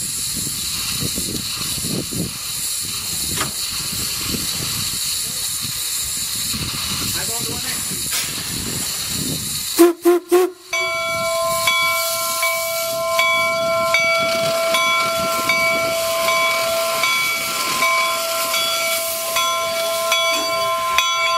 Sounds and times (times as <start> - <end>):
Railroad car, train wagon: 0.0 - 21.3
Train: 0.0 - 21.3
Speech: 5.2 - 6.1, 7.1 - 8.1
Steam whistle: 9.8 - 17.2.